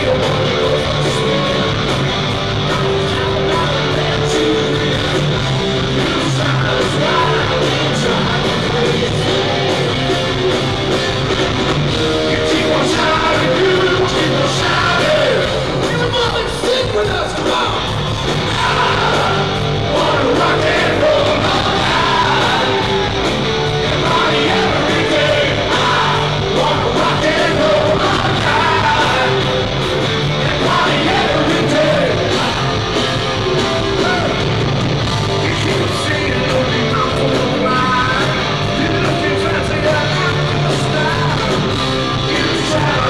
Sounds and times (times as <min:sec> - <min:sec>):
Rock and roll: 0:00.0 - 0:43.1.